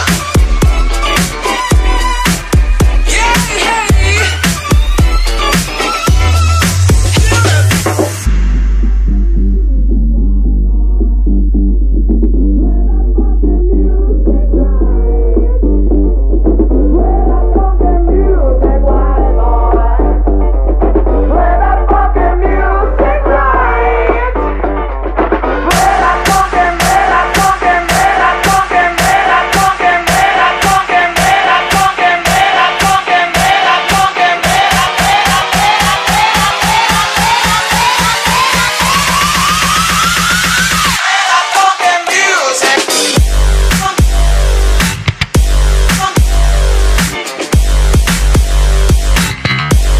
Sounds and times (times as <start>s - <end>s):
Dance music: 0.0s - 50.0s.